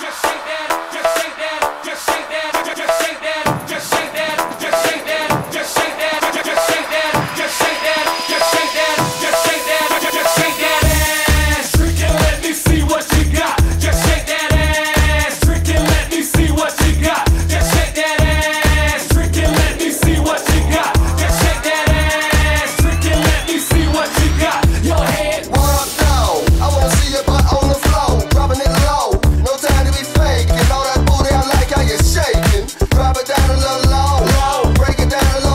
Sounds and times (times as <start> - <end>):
Dance music: 0.0 - 35.5
Disco: 0.0 - 35.5.